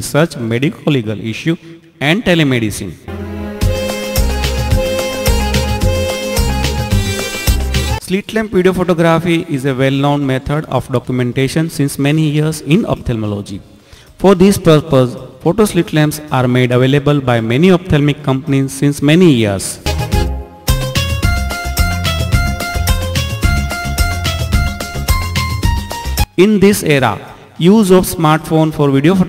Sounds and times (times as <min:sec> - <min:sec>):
Speech: 0:00.0 - 0:03.1, 0:08.0 - 0:13.6, 0:14.2 - 0:19.9, 0:26.4 - 0:29.2
Music: 0:03.1 - 0:08.0, 0:19.8 - 0:26.4.